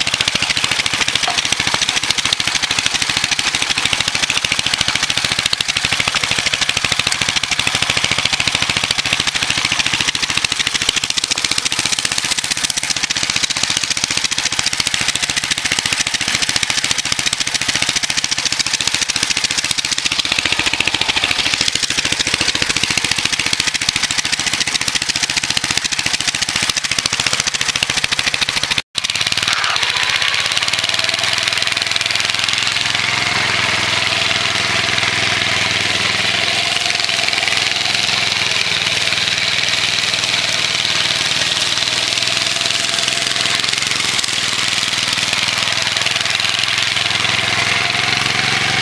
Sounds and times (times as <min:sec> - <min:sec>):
Lawn mower: 0:00.0 - 0:48.8.